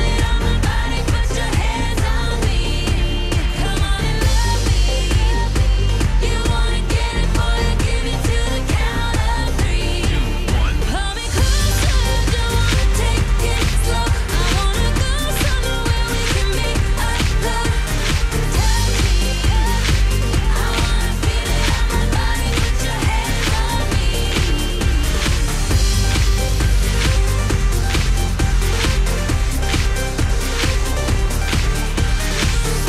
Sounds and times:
Music of Asia: 0.0s - 32.8s.

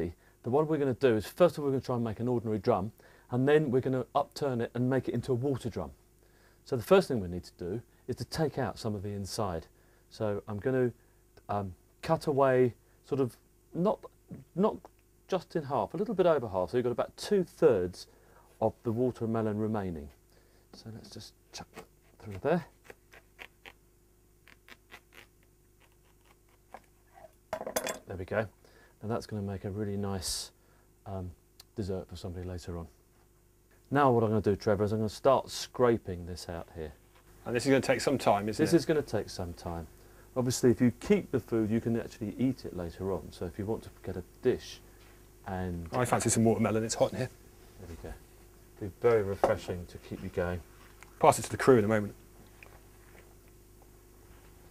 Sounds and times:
Speech: 0.0s - 6.0s, 6.6s - 20.2s, 20.8s - 22.7s, 28.0s - 33.0s, 33.9s - 44.8s, 45.4s - 48.2s, 48.8s - 52.2s.

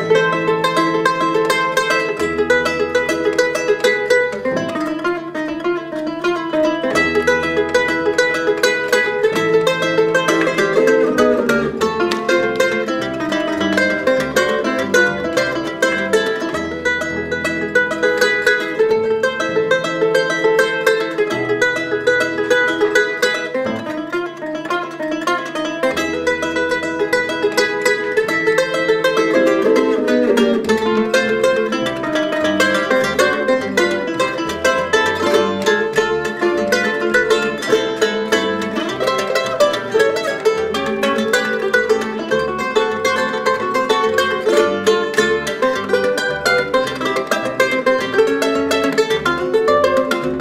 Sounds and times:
Pizzicato: 0.0s - 50.4s
Cello: 4.3s - 18.2s, 28.2s - 50.4s.

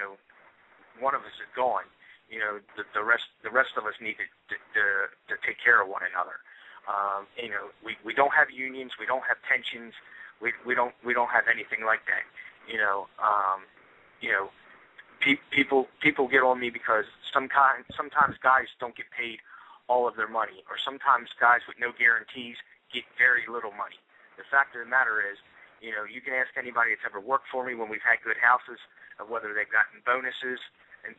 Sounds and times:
Speech: 0.0s - 0.2s, 1.0s - 31.1s.

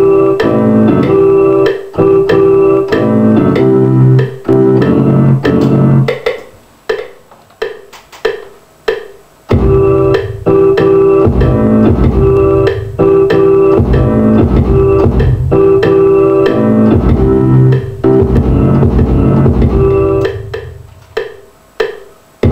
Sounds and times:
Music: 0.0s - 22.5s.

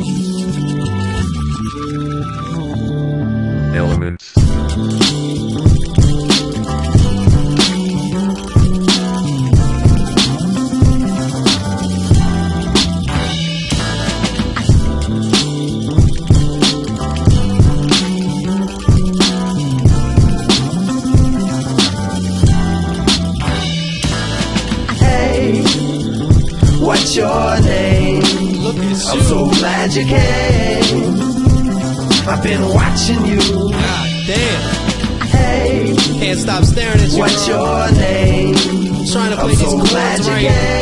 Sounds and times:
Music: 0.0s - 40.8s.

